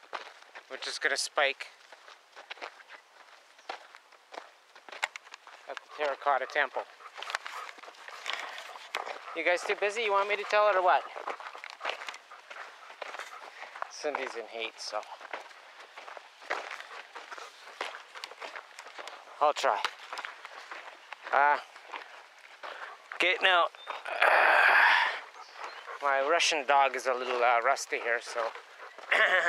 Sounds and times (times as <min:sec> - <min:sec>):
Speech: 0:00.7 - 0:01.7, 0:05.7 - 0:06.9, 0:09.4 - 0:11.2, 0:13.9 - 0:15.2, 0:19.4 - 0:19.9, 0:21.3 - 0:21.7, 0:23.2 - 0:24.2, 0:26.0 - 0:28.6.